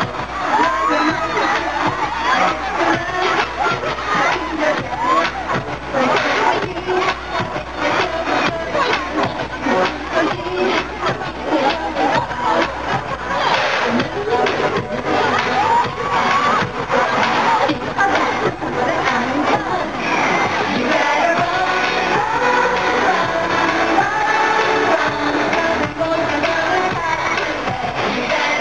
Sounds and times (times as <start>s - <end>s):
Music: 0.0s - 28.6s.